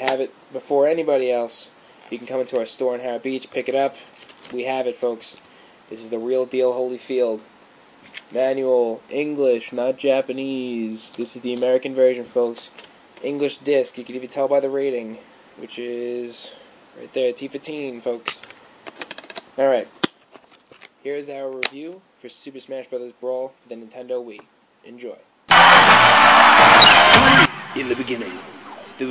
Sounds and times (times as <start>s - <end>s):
Speech: 0.0s - 7.5s, 8.3s - 18.5s, 19.6s - 19.9s, 21.0s - 25.3s, 27.8s - 29.1s.